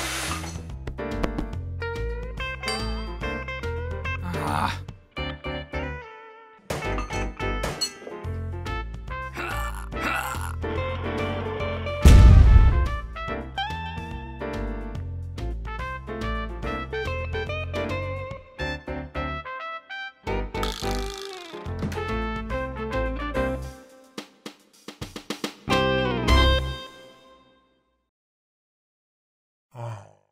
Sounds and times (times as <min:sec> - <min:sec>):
Music: 0:00.0 - 0:28.1.